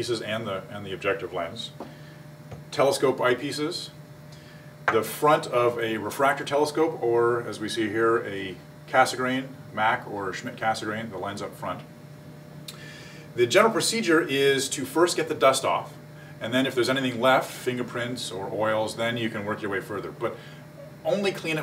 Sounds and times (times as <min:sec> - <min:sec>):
Speech: 0:00.0 - 0:01.8, 0:02.7 - 0:04.0, 0:04.9 - 0:11.9, 0:13.4 - 0:21.6.